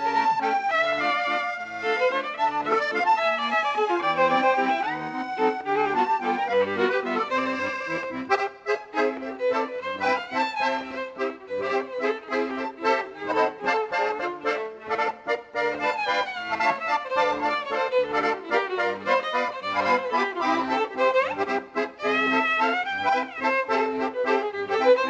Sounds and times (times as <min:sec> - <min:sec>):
Accordion: 0:00.0 - 0:25.1.